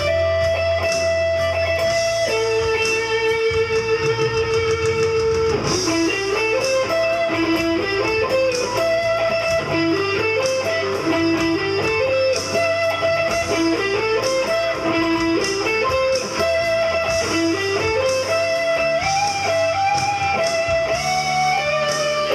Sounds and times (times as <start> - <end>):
Guitar: 0.0 - 22.3.